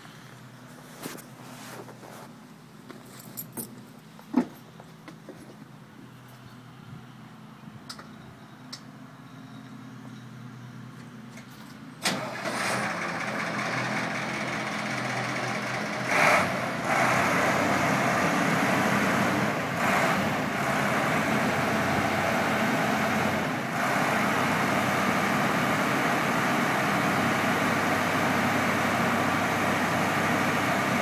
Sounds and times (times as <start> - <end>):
Truck: 0.0 - 31.0.